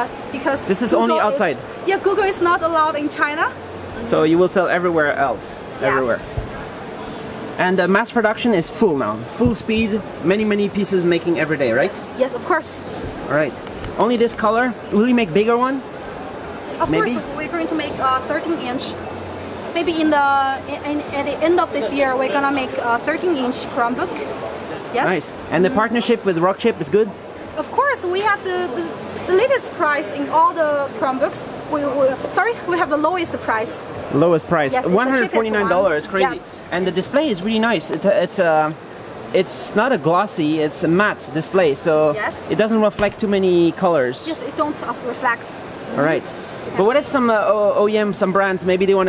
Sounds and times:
Speech: 16.8 - 17.4, 25.0 - 25.4, 34.4 - 37.0.

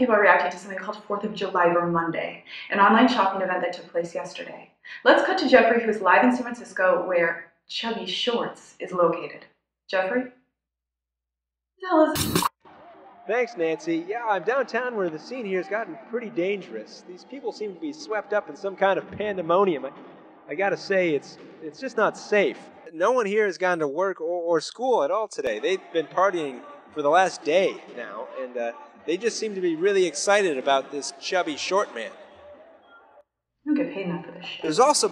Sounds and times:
Speech: 0.0 - 10.2, 11.8 - 12.2, 13.3 - 19.9, 20.5 - 32.2, 33.7 - 35.1.

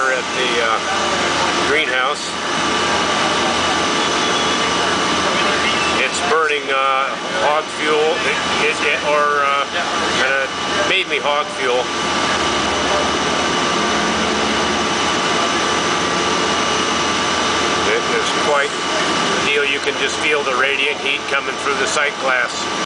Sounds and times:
Speech: 0.0 - 11.9, 17.8 - 22.8.

